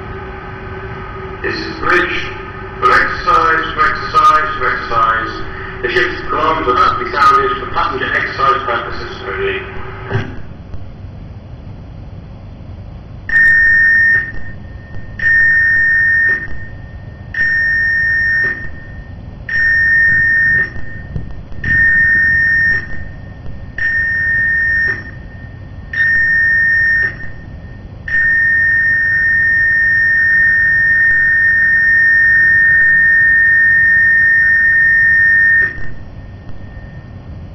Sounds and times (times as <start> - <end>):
Speech: 1.4 - 9.8.